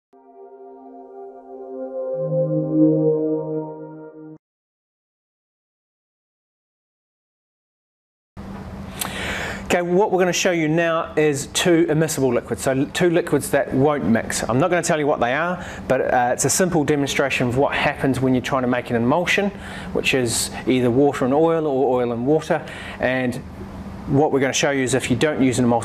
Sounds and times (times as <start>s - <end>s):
Ambient music: 0.1s - 4.4s
Speech: 9.7s - 23.4s, 24.1s - 25.8s.